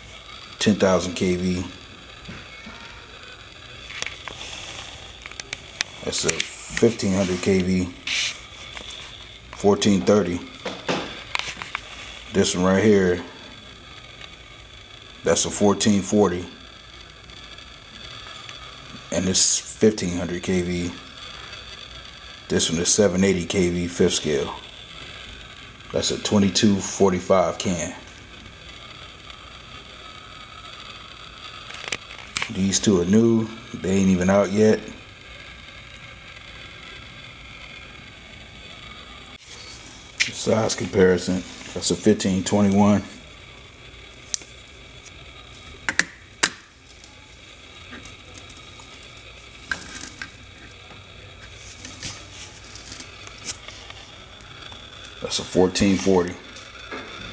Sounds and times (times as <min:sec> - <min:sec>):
Speech: 0:00.6 - 0:01.8, 0:06.0 - 0:08.0, 0:09.6 - 0:10.6, 0:12.3 - 0:13.4, 0:15.2 - 0:16.6, 0:19.1 - 0:21.0, 0:22.5 - 0:24.6, 0:25.9 - 0:28.1, 0:32.5 - 0:35.0, 0:40.2 - 0:43.2, 0:55.2 - 0:56.4.